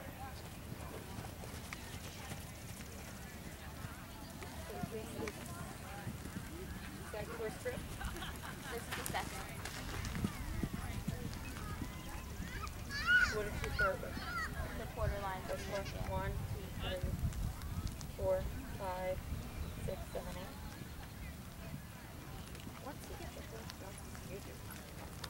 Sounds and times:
Speech: 0.0s - 17.2s, 18.1s - 25.0s
Clip-clop: 0.0s - 25.3s.

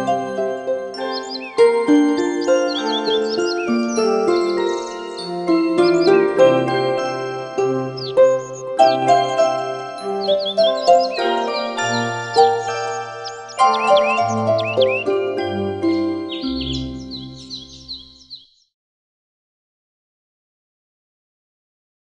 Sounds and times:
Music: 0.0s - 18.4s.

